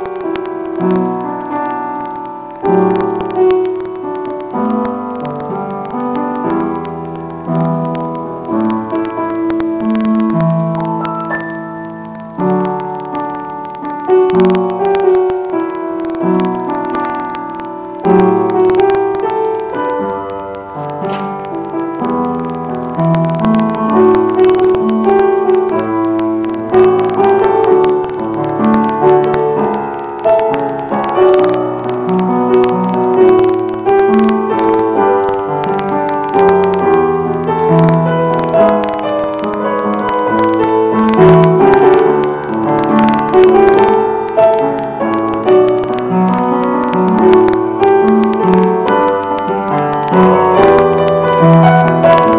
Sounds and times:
Music: 0.0 - 52.3.

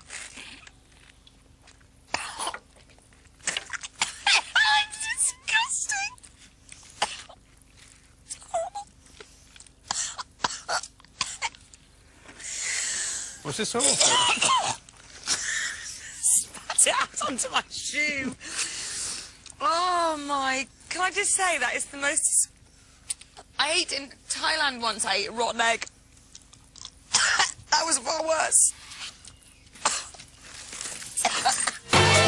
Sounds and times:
Speech: 23.6 - 25.9, 27.7 - 28.7.

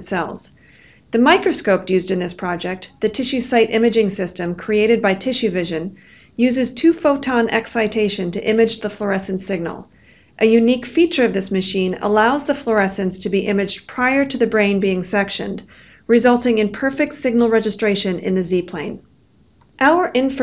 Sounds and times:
Speech: 0.0 - 0.5, 1.2 - 19.0, 19.8 - 20.4.

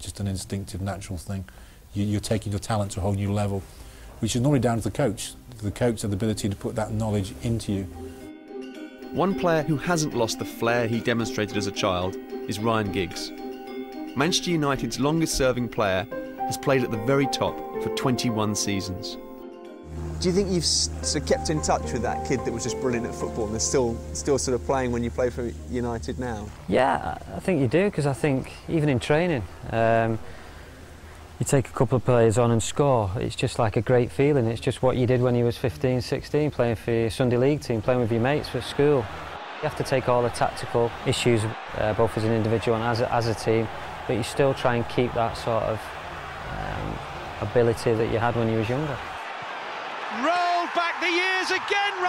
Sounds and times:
Speech: 0.0 - 3.6, 4.2 - 7.9, 9.2 - 13.3, 14.2 - 19.2, 20.2 - 30.2, 31.4 - 45.8, 46.6 - 49.0, 50.2 - 52.0
Music: 4.2 - 26.6.

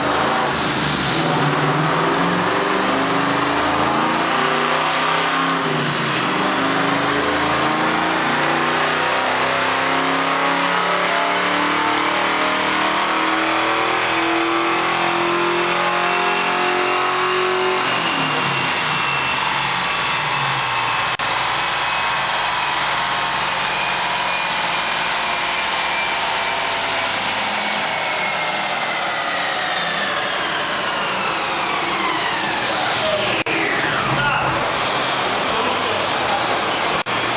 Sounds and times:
Accelerating, revving, vroom: 0.0 - 20.2, 22.0 - 35.8
Car: 0.0 - 37.3
Medium engine (mid frequency): 0.0 - 37.3
Speech: 32.7 - 33.4, 34.0 - 34.6, 35.4 - 37.0.

